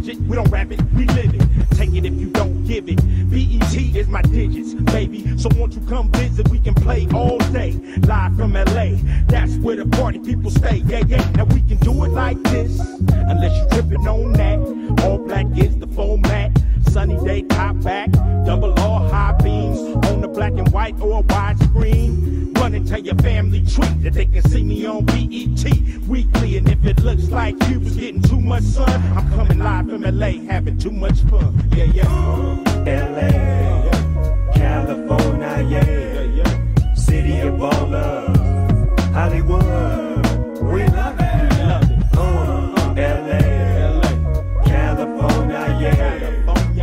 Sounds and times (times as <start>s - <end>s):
Hip hop music: 0.0s - 46.8s
Rapping: 0.0s - 46.8s.